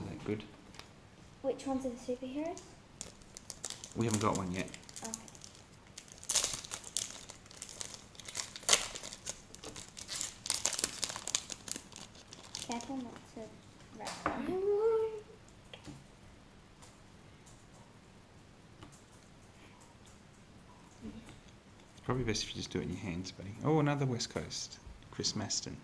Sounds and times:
Inside, small room: 0:00.0 - 0:25.8
Crumpling, crinkling: 0:02.5 - 0:13.2.

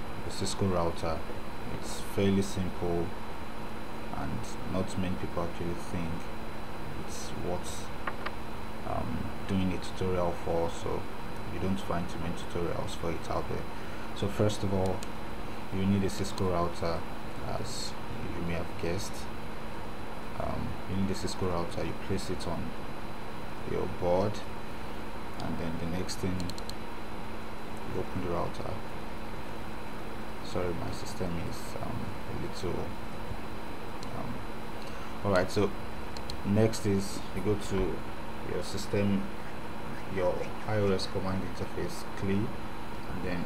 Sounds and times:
Speech: 0:00.3 - 0:03.2, 0:04.1 - 0:06.3, 0:06.9 - 0:07.9, 0:08.9 - 0:15.0, 0:15.7 - 0:19.3, 0:20.4 - 0:22.8, 0:23.6 - 0:24.5, 0:25.4 - 0:26.6, 0:27.9 - 0:28.9, 0:30.4 - 0:33.0, 0:34.1 - 0:34.4, 0:35.2 - 0:35.8, 0:36.4 - 0:39.3, 0:40.0 - 0:43.4.

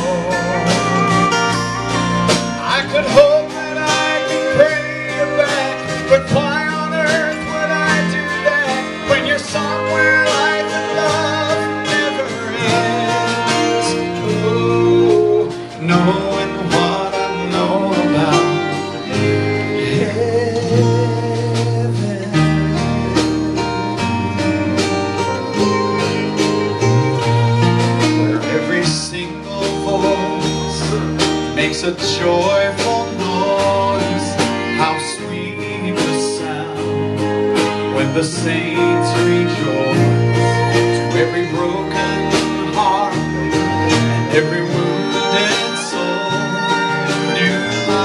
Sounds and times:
Music: 0:00.0 - 0:48.0
Male singing: 0:02.7 - 0:19.0, 0:19.8 - 0:22.9, 0:28.2 - 0:37.0, 0:37.9 - 0:43.5, 0:44.2 - 0:48.0.

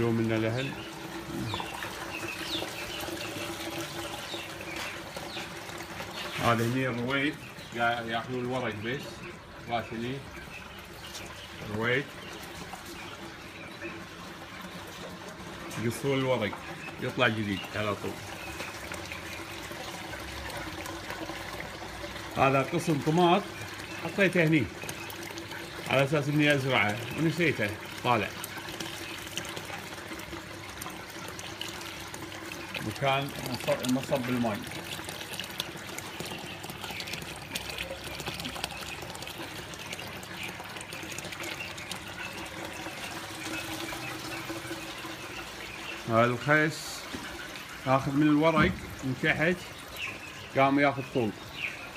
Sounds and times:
Speech: 0:00.0 - 0:00.8, 0:06.4 - 0:10.3, 0:11.6 - 0:12.1, 0:15.7 - 0:18.2, 0:22.4 - 0:24.7, 0:25.9 - 0:28.4, 0:32.8 - 0:34.7, 0:46.1 - 0:47.1, 0:47.8 - 0:49.7, 0:50.5 - 0:51.4
Liquid: 0:00.0 - 0:51.9
Water tap, faucet: 0:00.0 - 0:51.9.

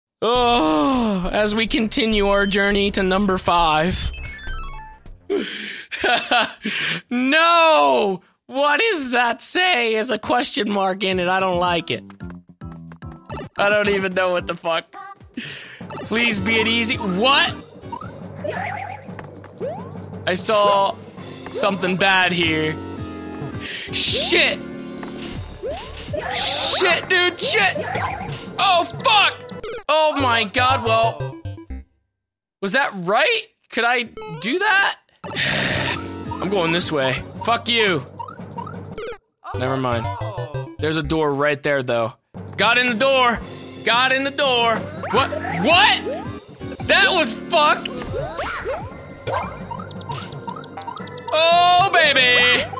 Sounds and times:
Speech: 0:00.2 - 0:04.0, 0:07.1 - 0:12.0, 0:13.6 - 0:15.1, 0:16.1 - 0:17.6, 0:28.6 - 0:31.3, 0:32.6 - 0:35.0, 0:39.5 - 0:46.1, 0:46.9 - 0:47.9, 0:51.3 - 0:52.7
Music: 0:00.3 - 0:05.6, 0:10.3 - 0:31.8, 0:35.2 - 0:52.7.

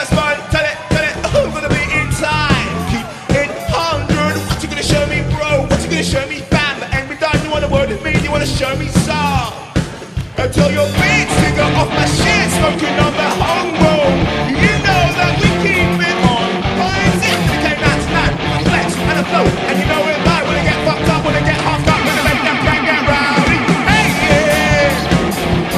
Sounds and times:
Music: 0:00.0 - 0:25.7.

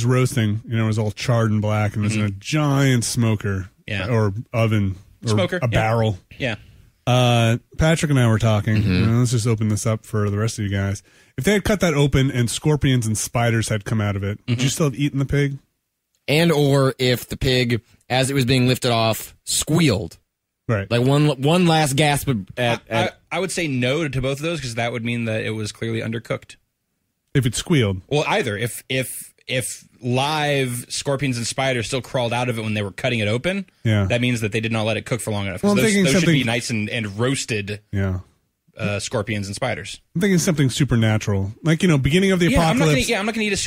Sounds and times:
Speech: 0:00.0 - 0:15.7, 0:16.3 - 0:26.6, 0:27.3 - 0:43.6.

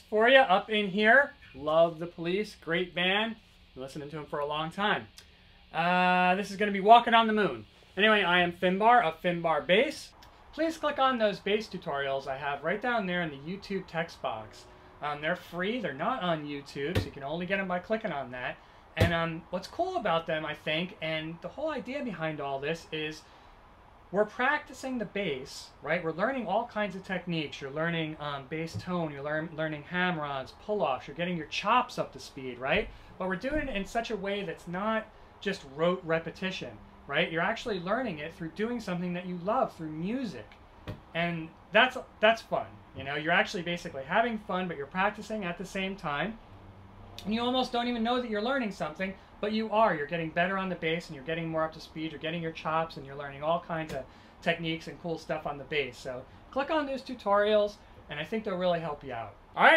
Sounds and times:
Speech: 0:00.0 - 0:23.3, 0:24.2 - 0:46.4, 0:47.2 - 0:59.7.

